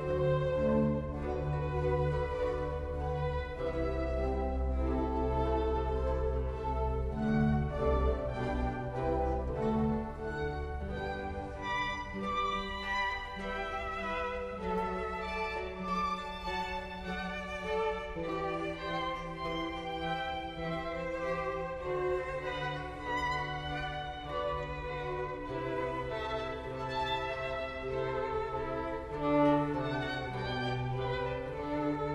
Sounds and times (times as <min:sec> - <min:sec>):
Violin, fiddle: 0:00.0 - 0:32.1.